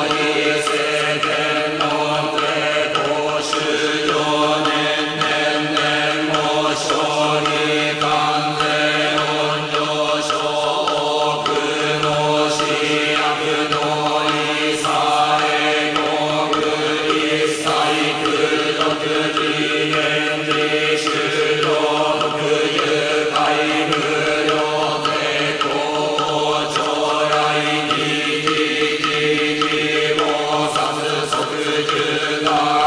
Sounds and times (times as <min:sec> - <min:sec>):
Mantra: 0:00.0 - 0:32.8.